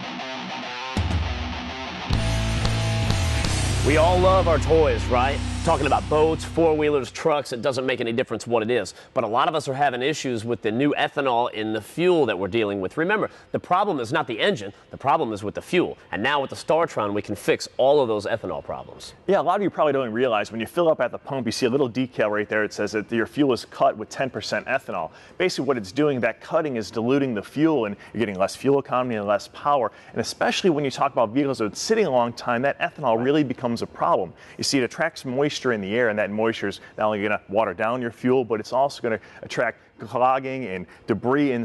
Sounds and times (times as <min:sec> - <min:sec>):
Speech: 0:03.8 - 0:41.6.